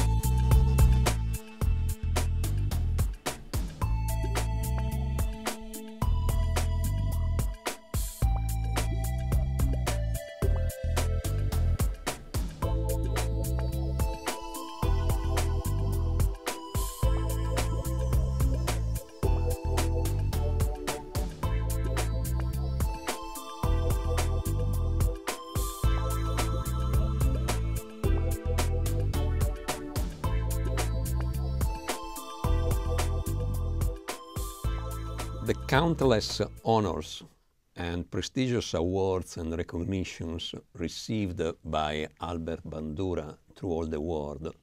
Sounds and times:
Music: 0.0 - 37.1
Speech: 35.4 - 44.6.

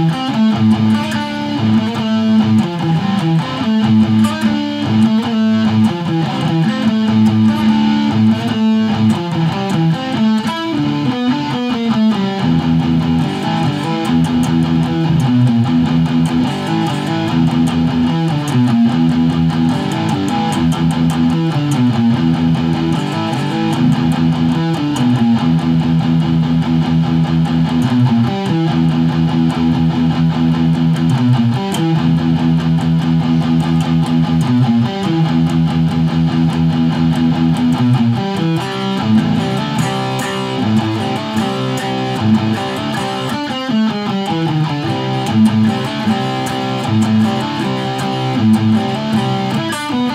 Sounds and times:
Electric guitar: 0.0 - 50.1.

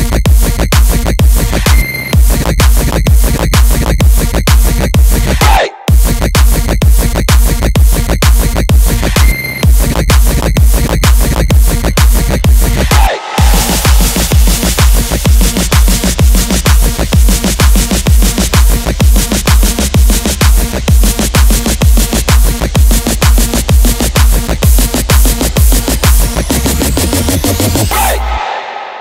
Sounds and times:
Electronic dance music: 0.0 - 29.0.

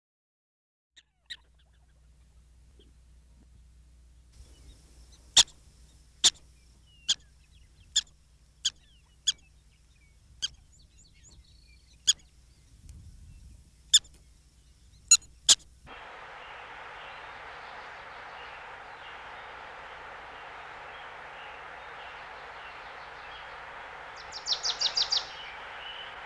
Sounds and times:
Chirp, tweet: 4.4 - 15.6, 16.4 - 26.2.

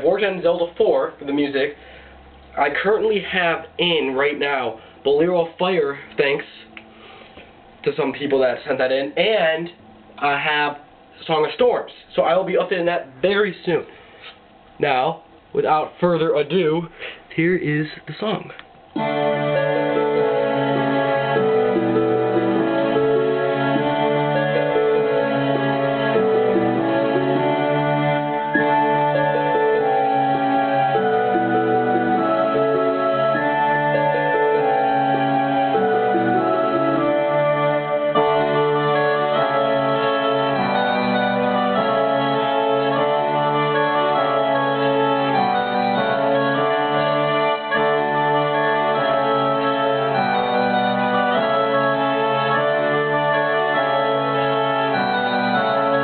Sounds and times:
Speech: 0.0 - 1.8, 2.6 - 6.7, 7.9 - 13.9, 14.8 - 18.6
Music: 0.0 - 12.8, 18.9 - 56.0.

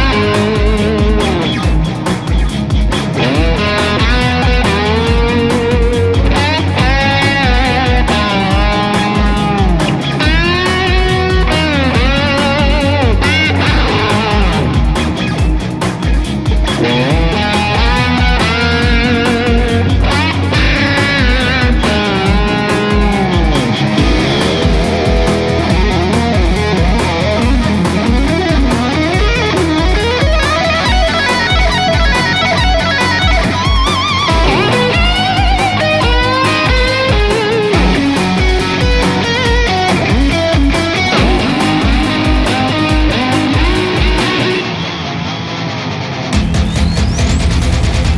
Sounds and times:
Steel guitar, slide guitar: 0.0 - 46.6.

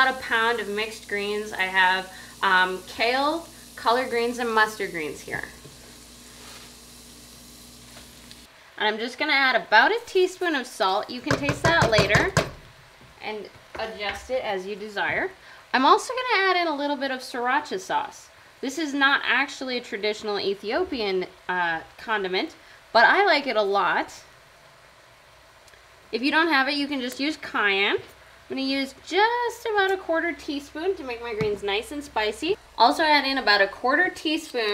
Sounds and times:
Speech: 0.0 - 5.6, 8.8 - 12.4, 13.2 - 24.3, 26.2 - 34.7
Frying (food): 0.0 - 34.7.

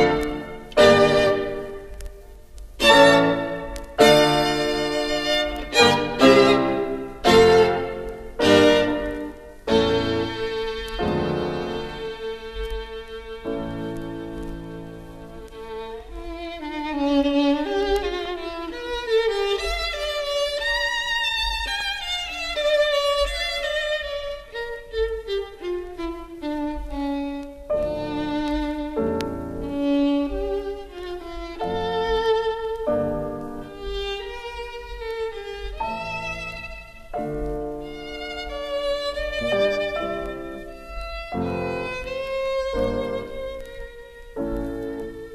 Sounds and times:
Violin, fiddle: 0.0 - 45.3.

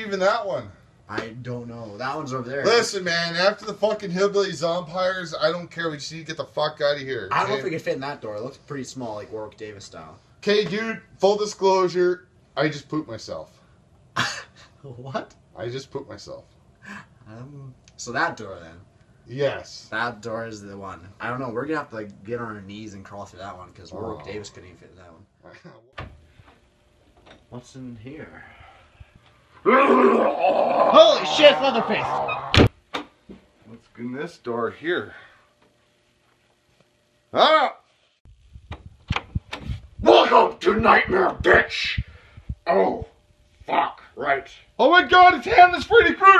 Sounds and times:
Inside, small room: 0.0 - 46.3.

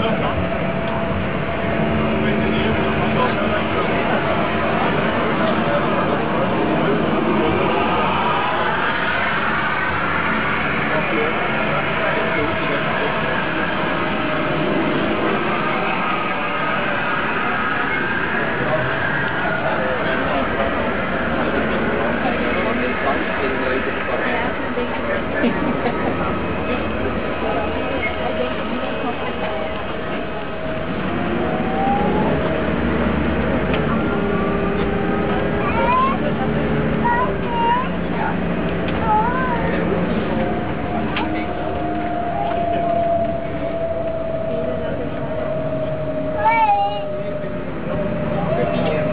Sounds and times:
Vehicle: 0.0 - 49.1
Speech: 2.0 - 8.8, 10.8 - 13.9, 17.9 - 30.5, 33.8 - 49.1.

